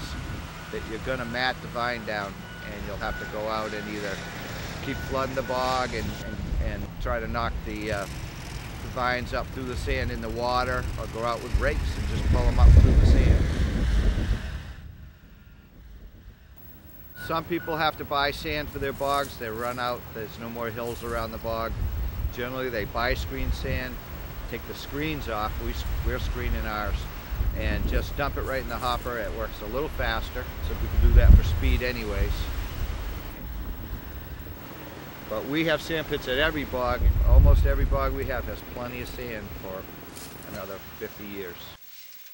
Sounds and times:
Speech: 0.0 - 8.1, 8.9 - 13.4, 17.2 - 32.5, 35.3 - 41.8
Vehicle: 0.0 - 42.3.

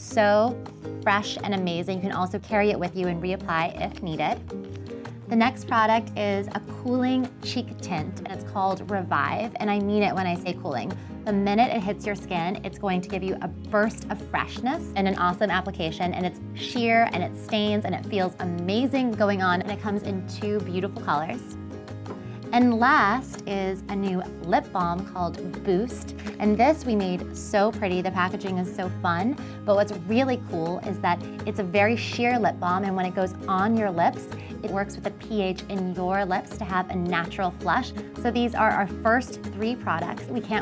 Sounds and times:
Speech: 0.0 - 4.4, 5.3 - 21.6, 22.5 - 40.6
Music: 0.0 - 40.6.

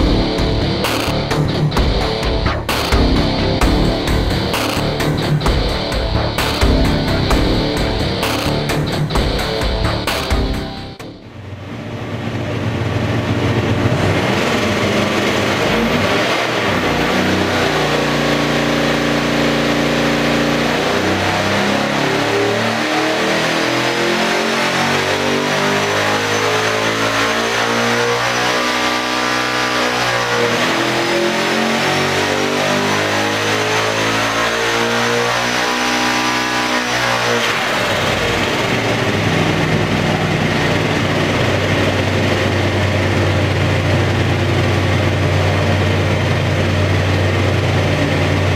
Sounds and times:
Heavy engine (low frequency): 0.0 - 48.5.

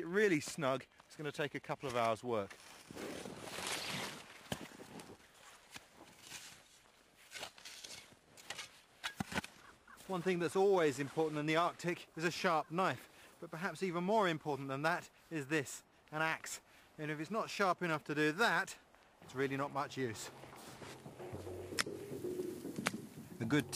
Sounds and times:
Speech: 0.0 - 2.5, 10.0 - 20.4, 23.4 - 23.7.

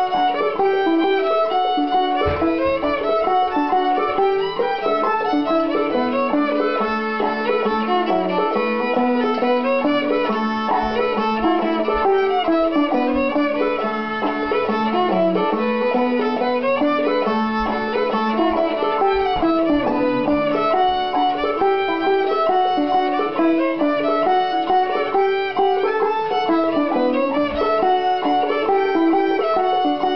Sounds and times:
Pizzicato: 0.0 - 30.1.

